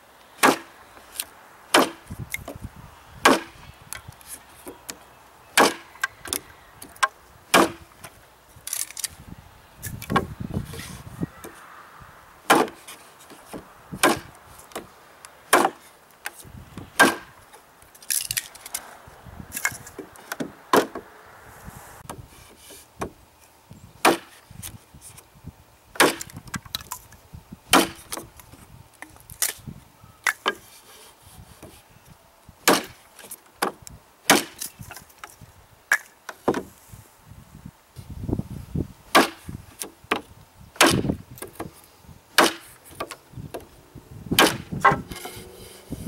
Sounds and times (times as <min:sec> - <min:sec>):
Wood: 0:36.0 - 0:36.7, 0:44.4 - 0:45.8.